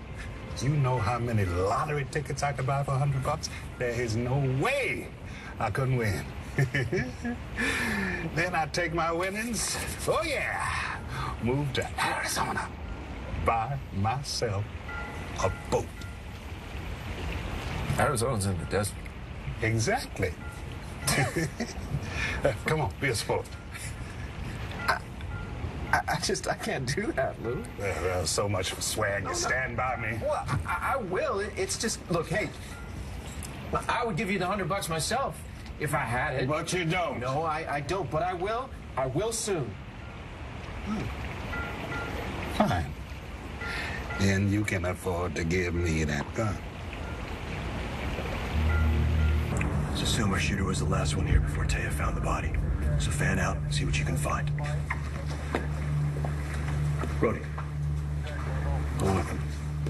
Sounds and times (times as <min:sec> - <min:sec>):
Raindrop: 0:00.0 - 0:59.8.